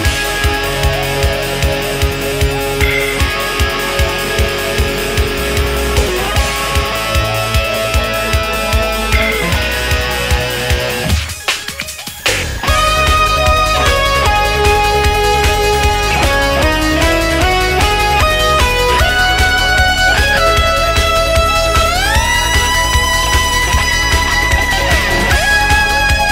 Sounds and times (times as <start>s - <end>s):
Musical instrument: 0.8s - 11.9s.